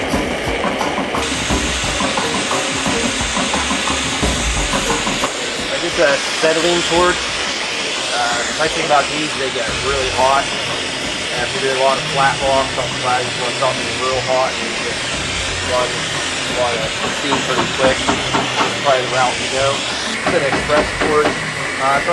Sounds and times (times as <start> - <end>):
Music: 0.0 - 22.1
Speech: 5.7 - 7.2, 8.1 - 10.6, 11.3 - 15.0, 15.6 - 22.1.